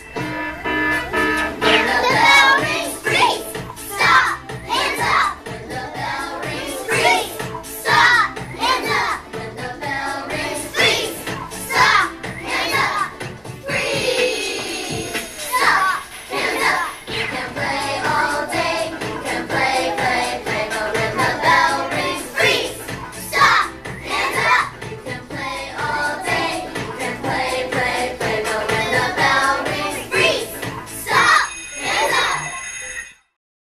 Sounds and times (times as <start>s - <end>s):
Music: 0.0s - 33.4s.